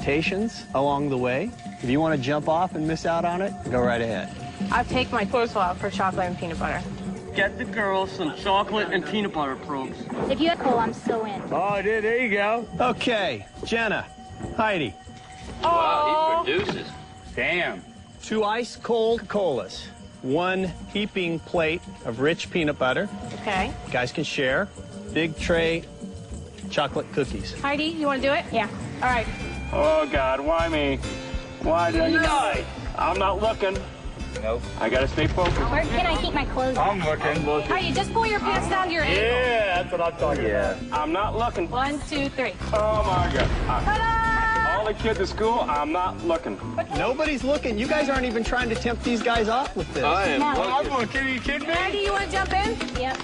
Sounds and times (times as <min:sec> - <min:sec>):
Music: 0:00.0 - 0:53.2.